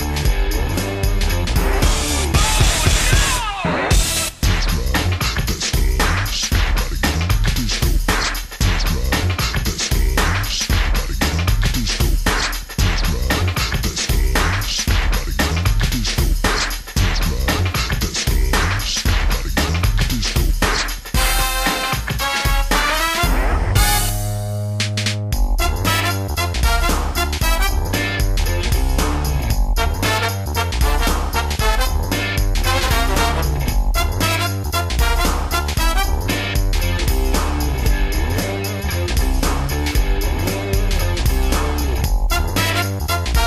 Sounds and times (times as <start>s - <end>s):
Music: 0.0s - 43.4s.